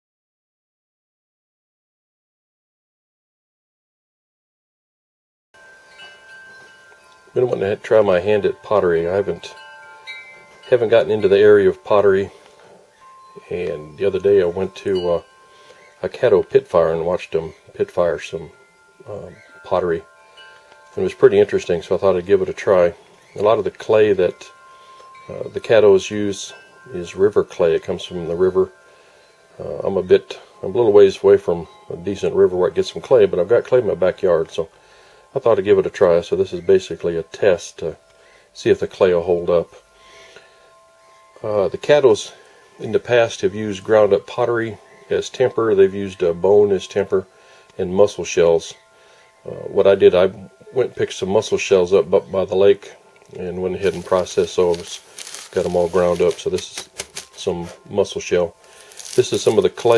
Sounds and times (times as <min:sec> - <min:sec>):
Wind chime: 0:05.6 - 0:59.9.